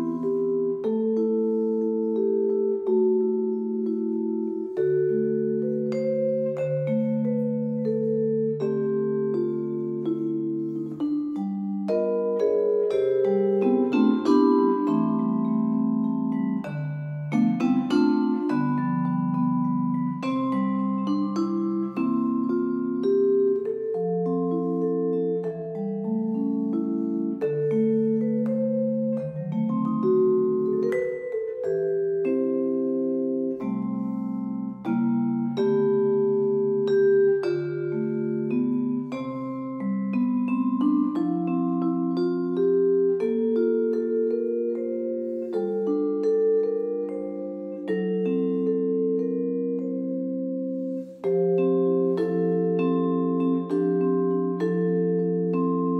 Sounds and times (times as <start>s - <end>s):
Musical instrument: 0.0s - 56.0s.